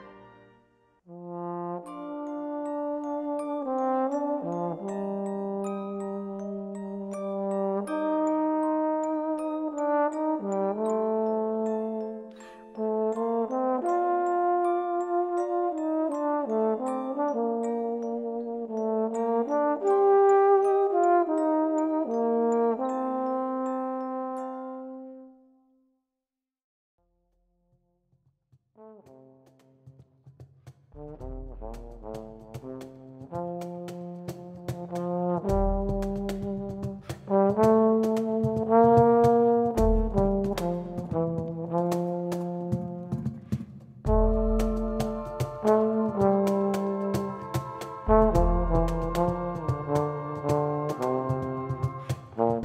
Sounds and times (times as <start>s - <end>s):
Trombone: 1.1s - 25.2s, 28.8s - 29.9s, 31.0s - 52.6s.